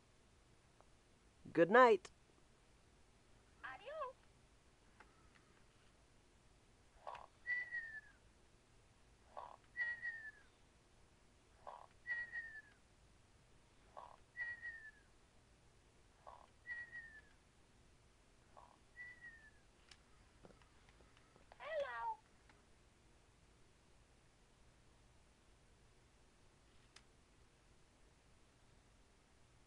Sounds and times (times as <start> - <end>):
Speech: 1.5 - 2.1, 3.6 - 4.2, 21.6 - 22.2.